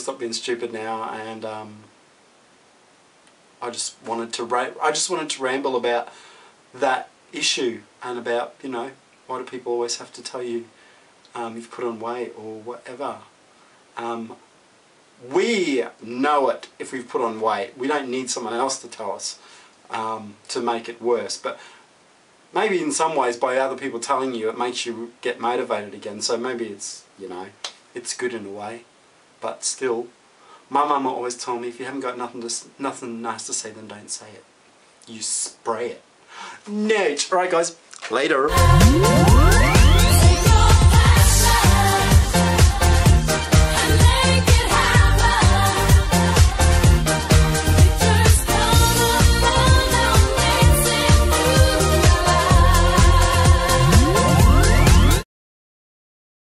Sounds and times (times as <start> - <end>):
Speech: 0.0 - 1.9, 3.6 - 6.1, 6.8 - 10.7, 11.3 - 13.3, 14.0 - 14.4, 15.2 - 21.6, 22.6 - 30.1, 30.7 - 36.0, 36.6 - 38.5
Pop music: 38.5 - 55.2.